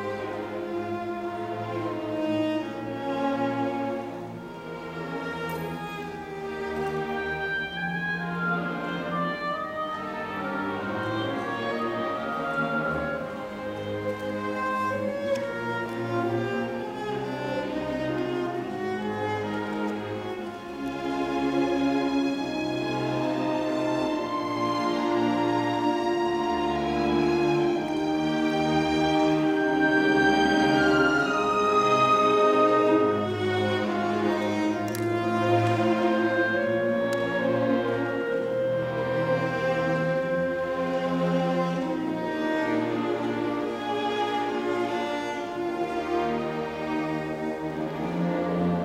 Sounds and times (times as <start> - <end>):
Cello: 0.0 - 48.8
Violin, fiddle: 0.0 - 48.8.